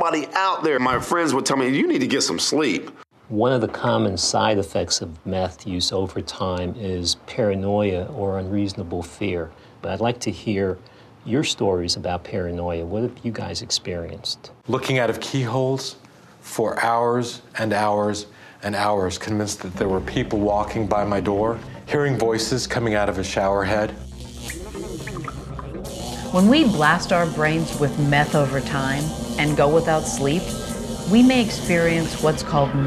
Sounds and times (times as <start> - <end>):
Speech: 0.0 - 24.0
Music: 19.8 - 32.8.